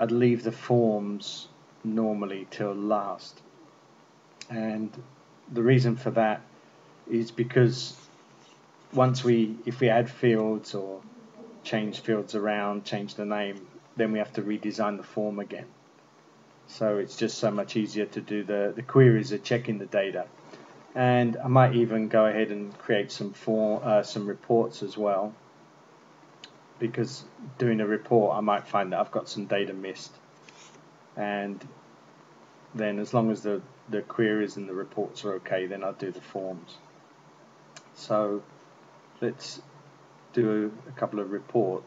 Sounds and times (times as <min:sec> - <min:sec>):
Speech: 0:00.0 - 0:03.5, 0:04.4 - 0:06.5, 0:07.1 - 0:08.1, 0:08.9 - 0:15.8, 0:16.7 - 0:20.4, 0:21.0 - 0:25.4, 0:26.8 - 0:30.2, 0:31.2 - 0:31.8, 0:32.8 - 0:36.9, 0:37.8 - 0:38.5, 0:39.2 - 0:39.7, 0:40.4 - 0:41.8.